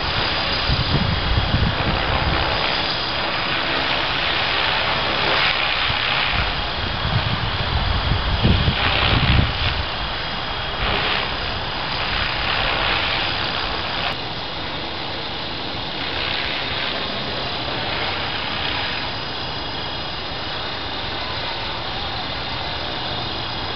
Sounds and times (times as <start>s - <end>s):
Wind noise (microphone): 0.0s - 14.2s.